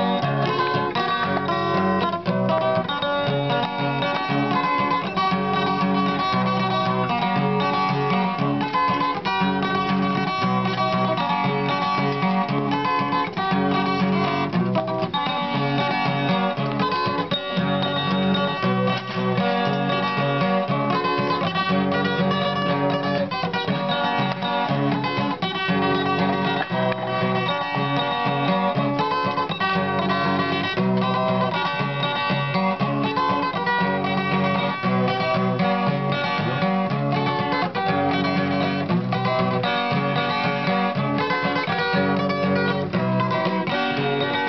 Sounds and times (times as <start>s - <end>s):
Strum: 0.0s - 44.4s.